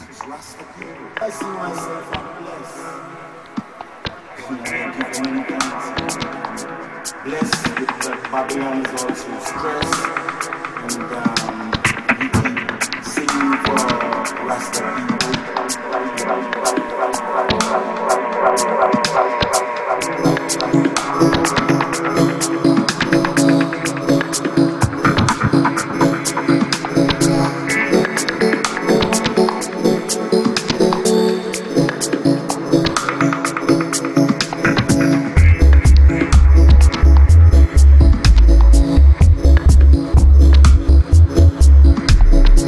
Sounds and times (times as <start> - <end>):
Music: 0.0 - 42.6.